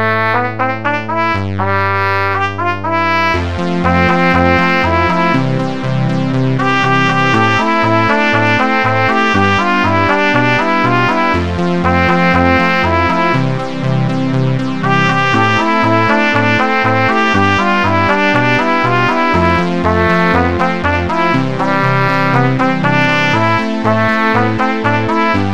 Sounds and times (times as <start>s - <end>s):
Trumpet: 0.0s - 25.5s.